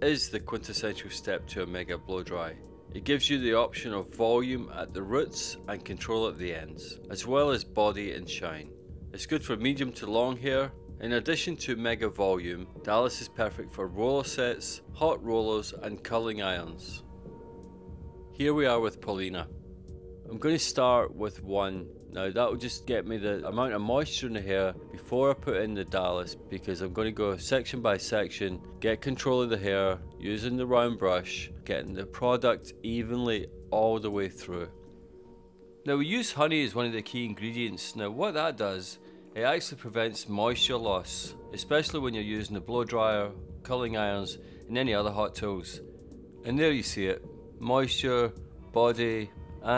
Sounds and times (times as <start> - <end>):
Speech: 0.0 - 17.1, 18.4 - 19.5, 20.3 - 34.8, 35.8 - 45.8, 46.4 - 49.7.